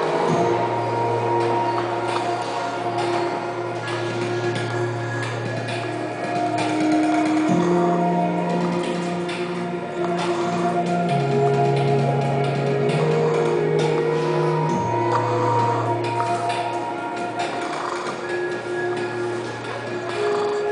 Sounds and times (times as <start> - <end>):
Music: 0.0 - 20.7.